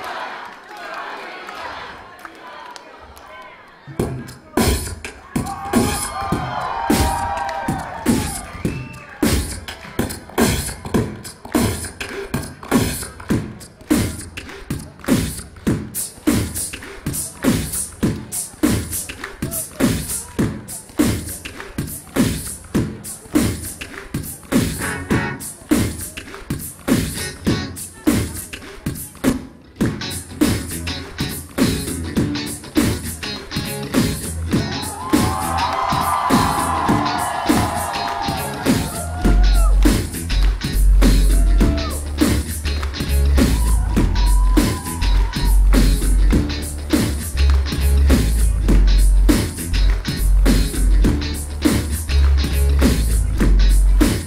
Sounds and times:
Music: 3.9 - 54.2.

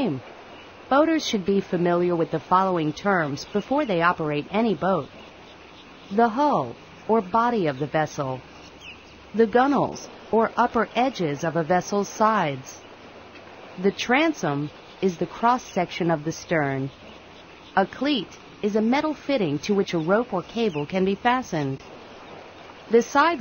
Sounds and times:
Speech: 0.0 - 0.2, 0.9 - 5.1, 6.1 - 8.4, 9.4 - 12.8, 13.8 - 16.9, 17.8 - 21.8, 22.9 - 23.4.

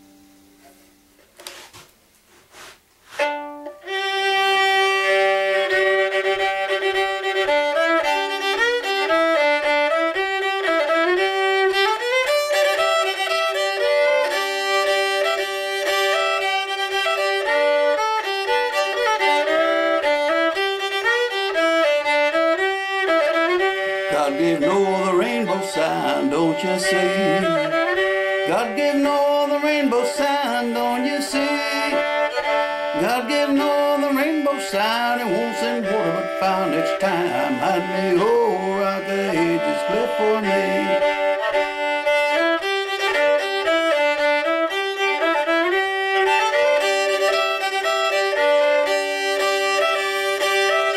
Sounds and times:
Violin, fiddle: 2.6 - 50.9.

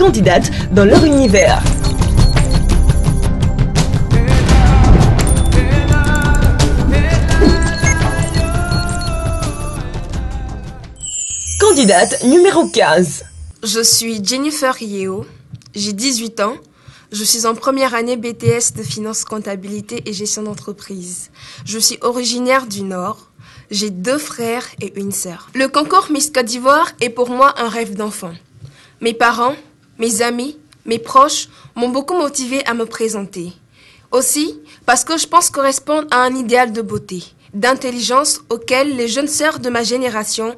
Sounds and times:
Speech: 0.0 - 1.7, 11.6 - 16.6, 17.2 - 28.4, 29.0 - 33.6, 34.2 - 40.5.

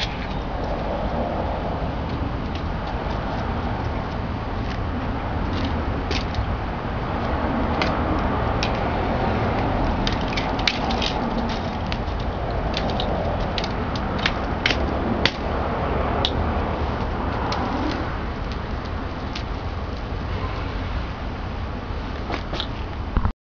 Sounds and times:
Bicycle: 0.0 - 23.3.

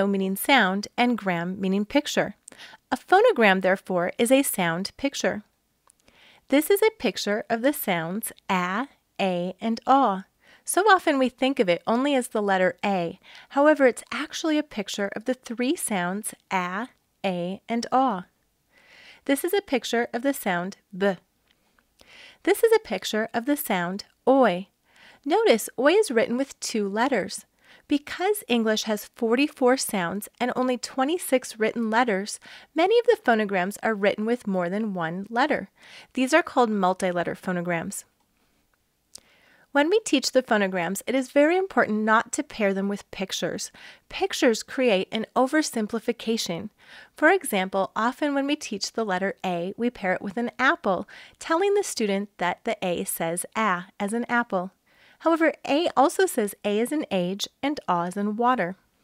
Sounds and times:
Speech: 0.0 - 5.5, 6.5 - 18.3, 19.3 - 21.2, 22.5 - 24.7, 25.3 - 38.1, 39.8 - 58.8.

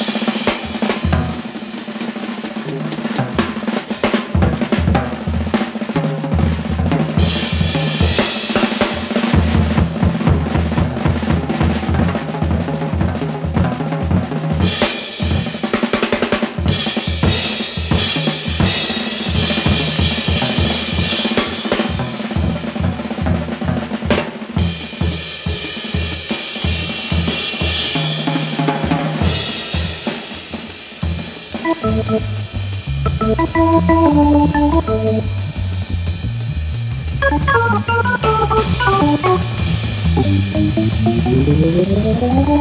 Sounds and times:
Drum kit: 0.0 - 42.6
Drum roll: 0.0 - 42.6.

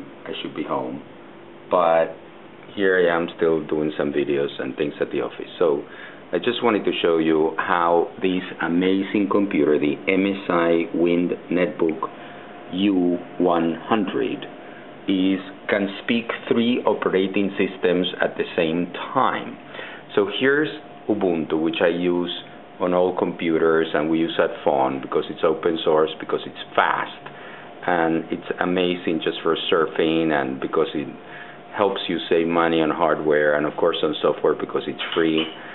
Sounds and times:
Speech: 0.0 - 1.1, 1.7 - 35.6.

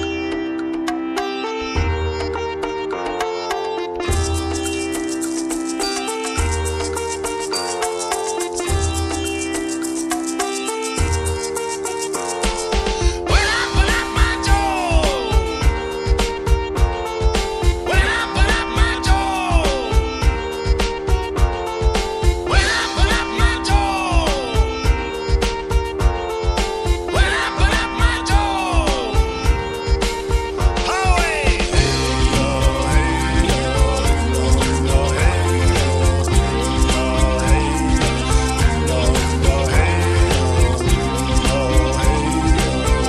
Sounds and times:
Music: 0.0 - 43.0.

